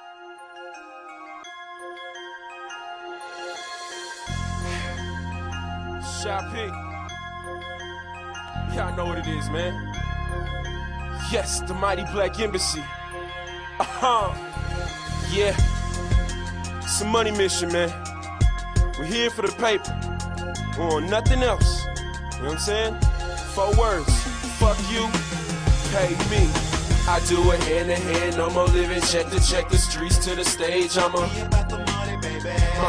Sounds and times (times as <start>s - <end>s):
Music: 0.0s - 32.8s
Speech: 6.0s - 6.8s, 8.7s - 9.8s, 11.2s - 12.9s, 13.8s - 14.4s, 15.3s - 15.6s, 16.9s - 18.0s, 19.0s - 19.9s, 20.7s - 23.0s, 23.6s - 25.2s, 25.9s - 30.5s.